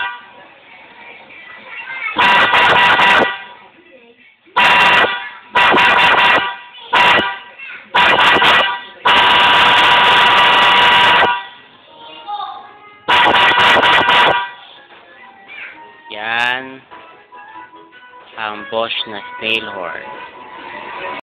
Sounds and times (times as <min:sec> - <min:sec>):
Vehicle horn, car horn, honking: 0:00.0 - 0:00.3, 0:02.2 - 0:03.6, 0:04.6 - 0:11.6, 0:13.1 - 0:14.6
Music: 0:00.0 - 0:02.2, 0:11.7 - 0:13.1, 0:14.4 - 0:21.2.